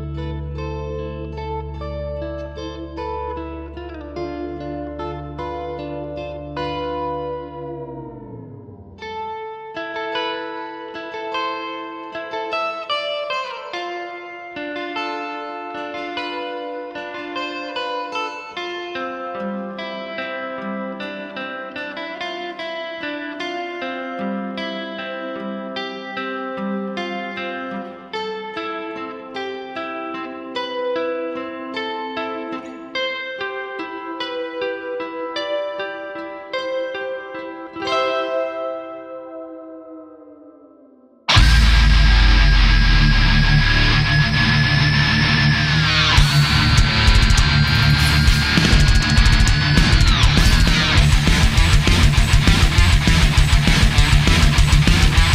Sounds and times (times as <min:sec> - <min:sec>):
Plucked string instrument: 0:00.0 - 0:55.3.